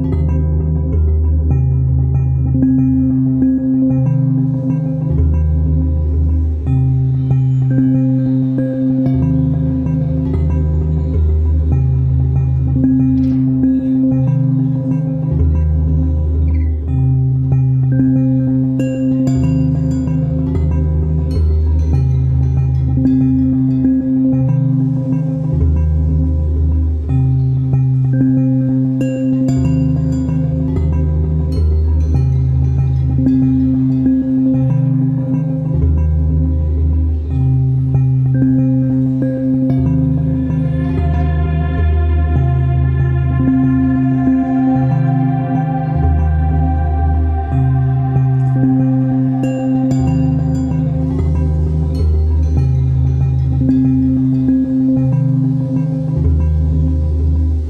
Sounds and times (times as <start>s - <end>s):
Music: 0.0s - 57.6s.